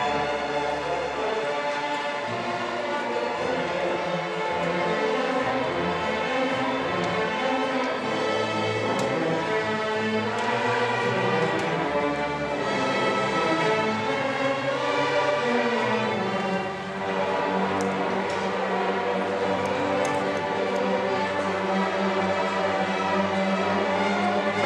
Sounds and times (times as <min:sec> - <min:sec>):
Violin, fiddle: 0:00.0 - 0:24.6.